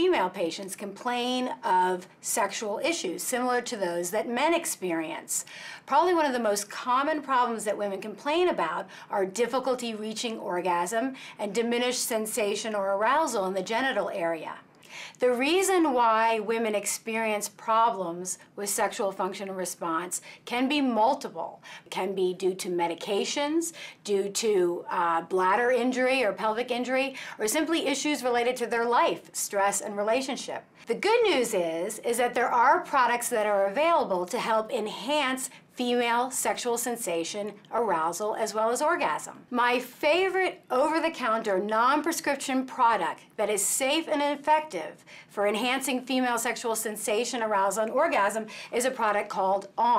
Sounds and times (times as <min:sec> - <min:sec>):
Female speech, woman speaking: 0:00.0 - 0:49.9.